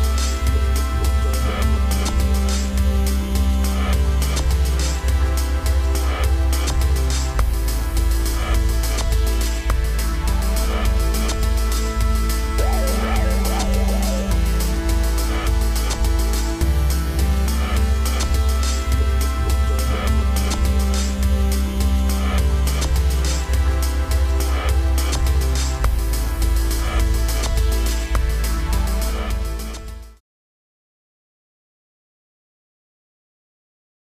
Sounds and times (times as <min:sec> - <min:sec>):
Music: 0:00.0 - 0:30.2.